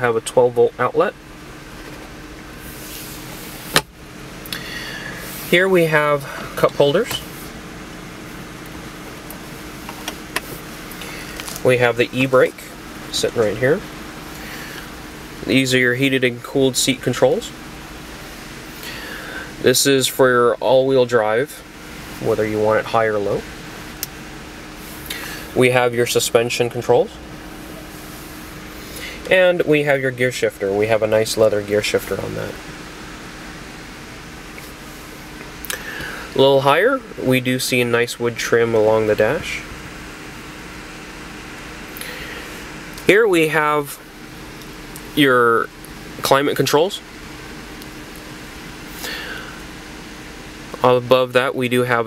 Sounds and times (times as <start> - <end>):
Speech: 0.0 - 1.2, 5.5 - 7.2, 11.6 - 13.8, 15.4 - 17.6, 19.6 - 21.6, 22.2 - 23.4, 25.6 - 27.2, 29.3 - 32.6, 36.4 - 39.7, 43.0 - 44.0, 45.2 - 47.0, 50.8 - 52.0
Car: 0.0 - 52.0.